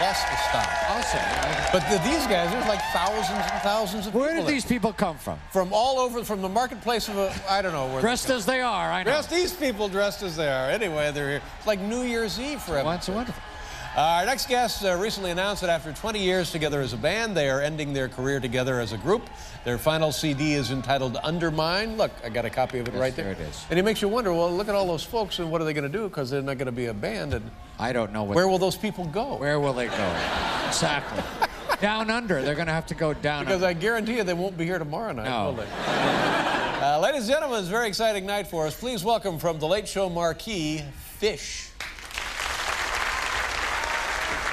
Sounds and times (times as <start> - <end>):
Hubbub, speech noise, speech babble: 0.0 - 38.5.